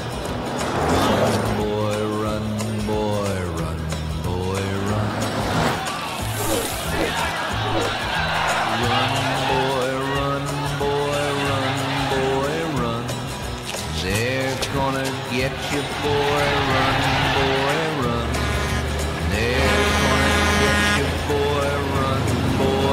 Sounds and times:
Music: 0:00.0 - 0:22.9.

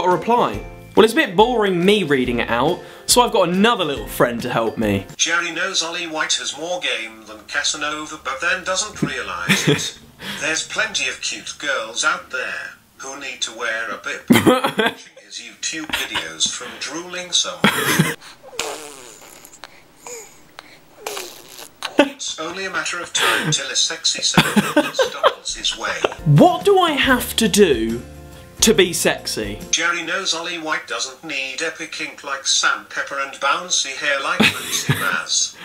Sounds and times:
Speech: 0:00.0 - 0:17.7, 0:22.0 - 0:28.0, 0:28.6 - 0:35.6
Inside, small room: 0:00.0 - 0:35.6.

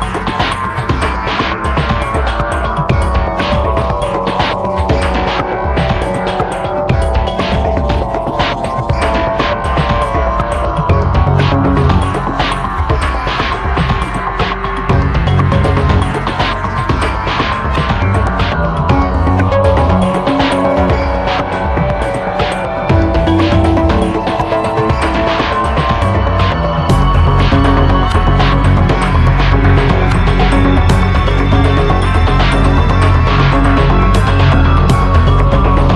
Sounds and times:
Music: 0:00.0 - 0:35.9.

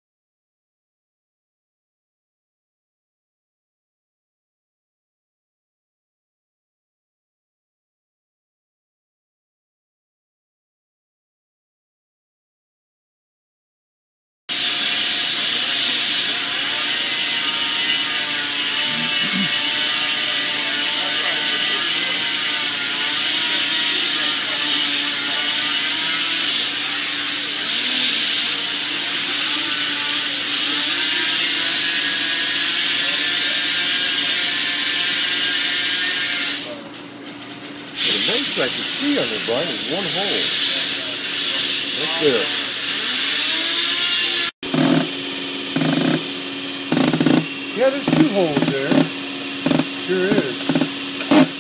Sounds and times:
Steam: 0:14.5 - 0:16.4, 0:26.2 - 0:34.1, 0:38.0 - 0:43.8.

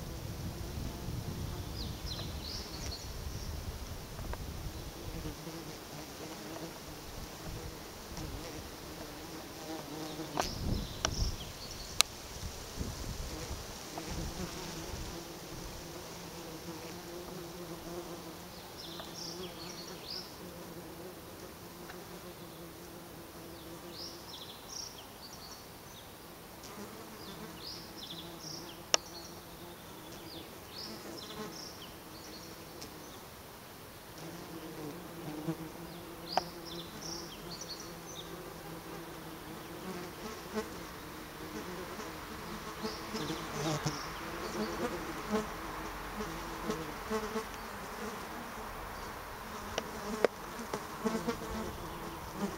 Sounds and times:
Bee, wasp, etc.: 0:00.0 - 0:52.5
Fly, housefly: 0:00.0 - 0:52.5.

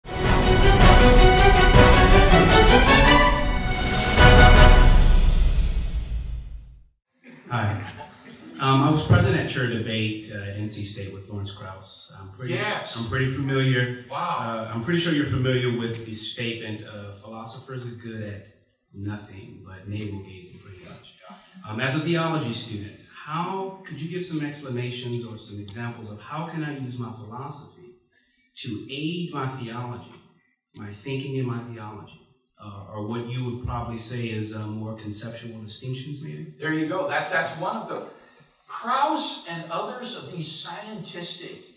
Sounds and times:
Speech: 0:07.3 - 0:18.4, 0:19.0 - 0:27.9, 0:28.6 - 0:30.2, 0:30.8 - 0:41.7.

